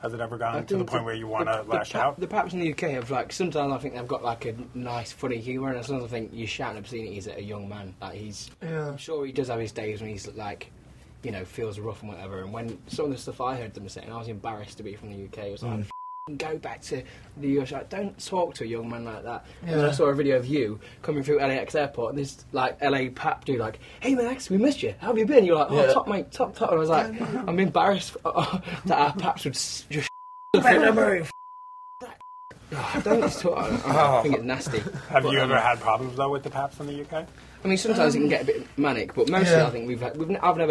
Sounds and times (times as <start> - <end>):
Speech: 0.0 - 31.3.